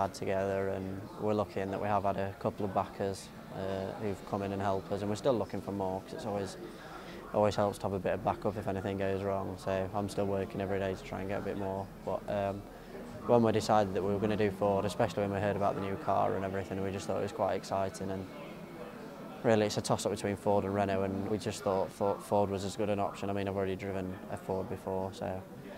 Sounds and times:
Speech: 0:00.0 - 0:25.7.

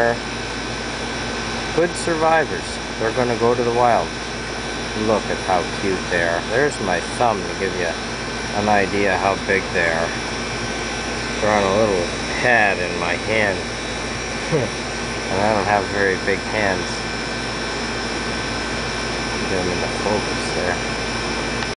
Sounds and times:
Speech: 0:00.0 - 0:00.2, 0:01.8 - 0:04.1, 0:05.0 - 0:08.0, 0:08.6 - 0:10.2, 0:11.4 - 0:13.7, 0:15.3 - 0:17.0, 0:19.4 - 0:20.8
Outside, urban or manmade: 0:00.0 - 0:21.7.

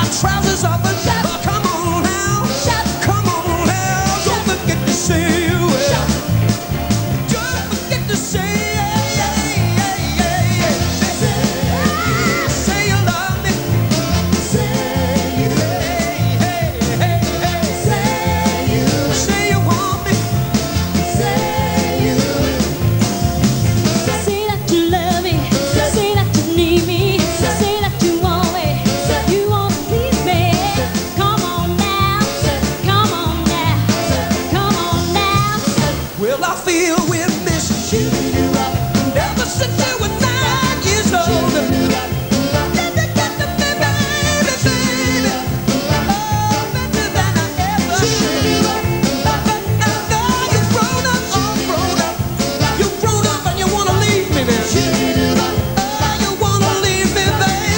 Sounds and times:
Music: 0:00.0 - 0:57.7.

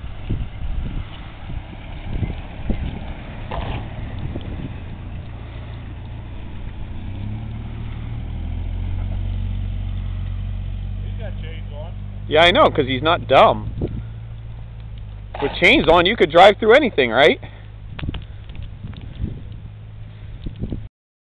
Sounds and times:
Speech: 0:11.0 - 0:13.6, 0:15.4 - 0:17.5.

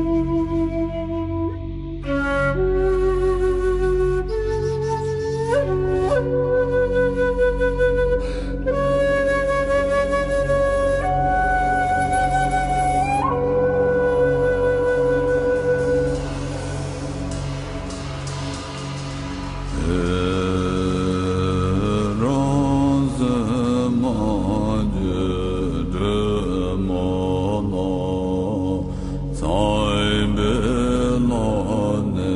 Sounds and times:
Mantra: 0:19.7 - 0:32.3.

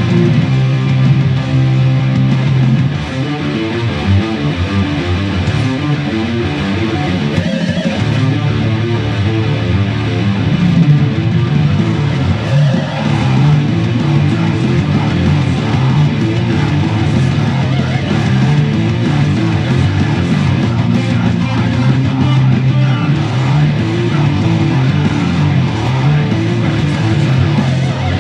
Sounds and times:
Guitar: 0:00.0 - 0:28.2.

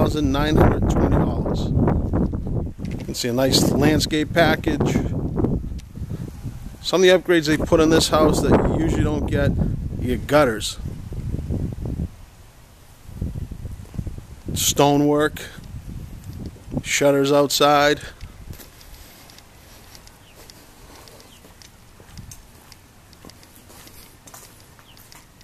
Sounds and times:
Speech: 0:00.0 - 0:01.8, 0:03.0 - 0:05.2, 0:06.8 - 0:10.8, 0:14.5 - 0:15.6, 0:16.8 - 0:18.2.

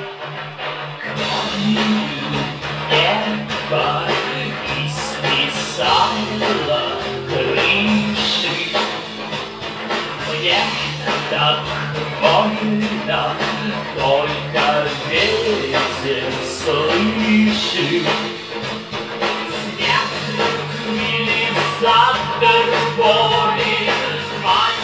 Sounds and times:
Music: 0:00.0 - 0:24.8.

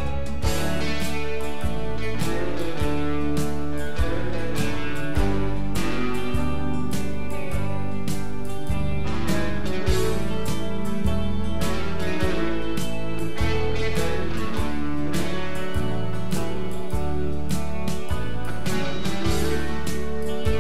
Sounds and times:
Country: 0:00.0 - 0:20.6.

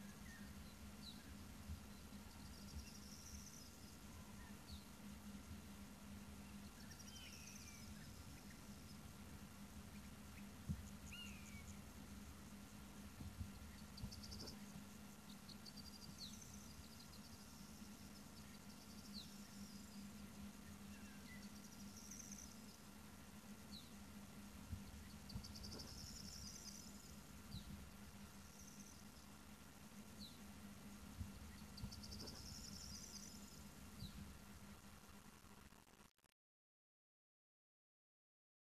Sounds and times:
Bird: 0:06.4 - 0:09.1, 0:09.8 - 0:11.9, 0:13.2 - 0:22.8, 0:24.7 - 0:29.3, 0:31.2 - 0:34.2.

